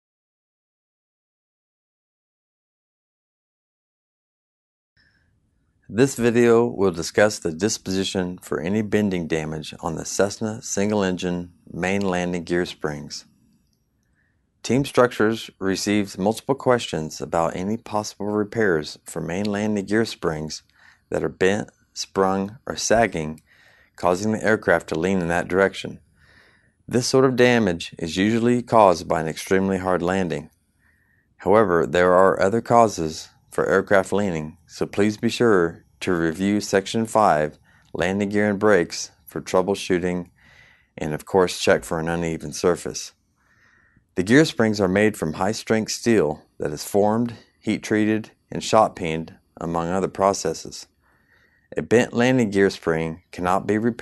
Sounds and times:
Speech: 0:05.9 - 0:13.3, 0:14.6 - 0:23.4, 0:24.0 - 0:26.0, 0:26.9 - 0:30.5, 0:31.4 - 0:40.3, 0:41.0 - 0:43.1, 0:44.2 - 0:50.9, 0:51.7 - 0:54.0.

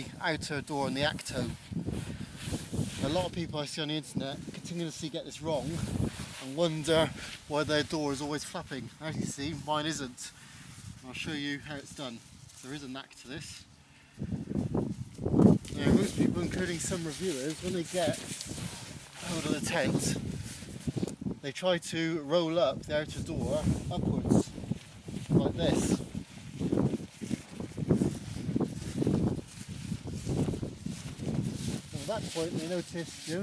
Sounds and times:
Speech: 0:00.0 - 0:01.6, 0:03.0 - 0:10.4, 0:11.0 - 0:13.7, 0:15.7 - 0:18.3, 0:19.2 - 0:20.2, 0:21.4 - 0:24.5, 0:25.4 - 0:26.0, 0:31.9 - 0:33.4.

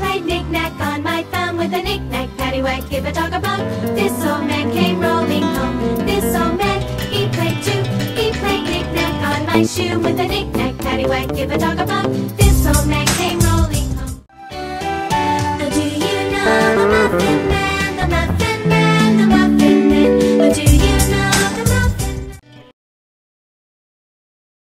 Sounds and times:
Guitar: 0:01.6 - 0:14.2, 0:14.8 - 0:22.7.

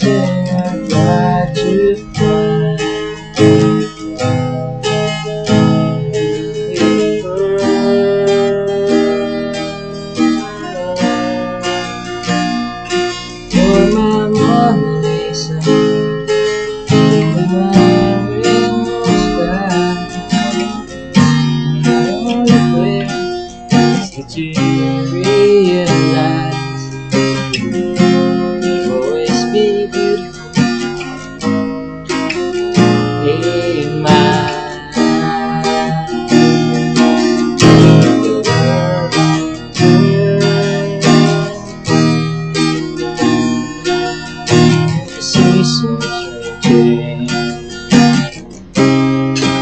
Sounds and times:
Acoustic guitar: 0:00.0 - 0:49.6.

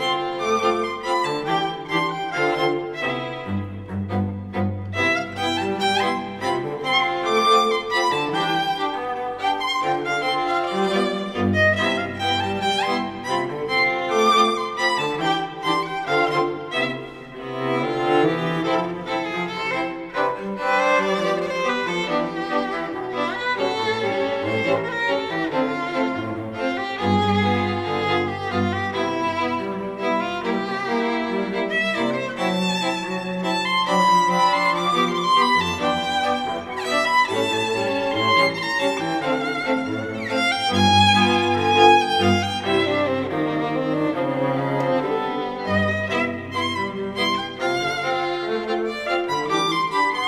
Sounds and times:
Music: 0:00.0 - 0:50.2.

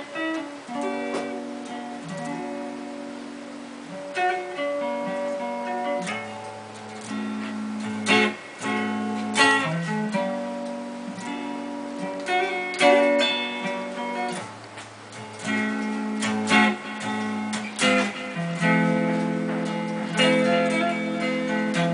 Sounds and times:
Music: 0:00.0 - 0:21.9.

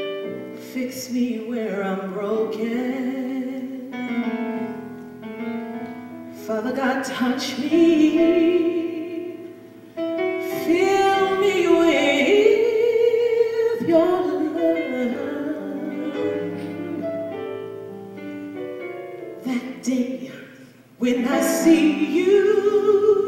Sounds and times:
Music: 0:00.0 - 0:23.2.

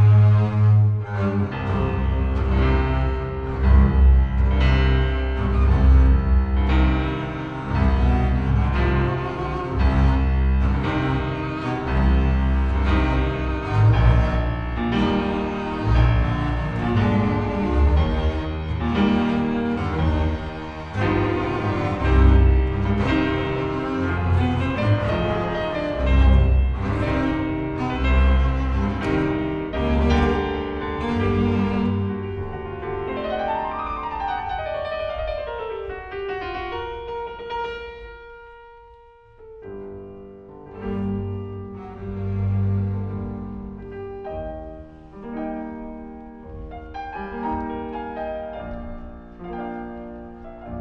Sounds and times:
Double bass: 0:00.0 - 0:33.8, 0:40.1 - 0:50.8
Cello: 0:00.0 - 0:50.8.

